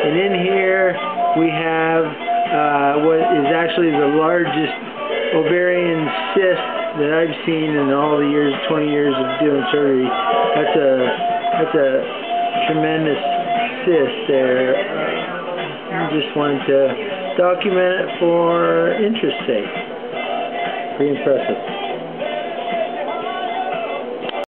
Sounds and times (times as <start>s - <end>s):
Speech: 0.0s - 4.8s, 5.4s - 13.2s, 13.9s - 15.3s, 15.9s - 19.7s, 21.0s - 21.6s
Music: 0.0s - 24.5s.